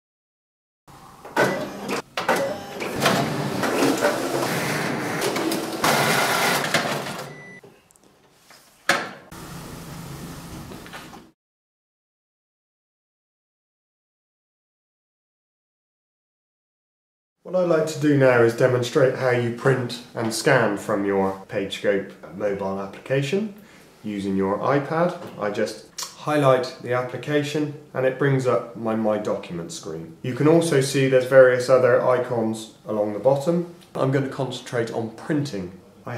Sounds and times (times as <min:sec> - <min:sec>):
Printer: 0:01.3 - 0:07.4.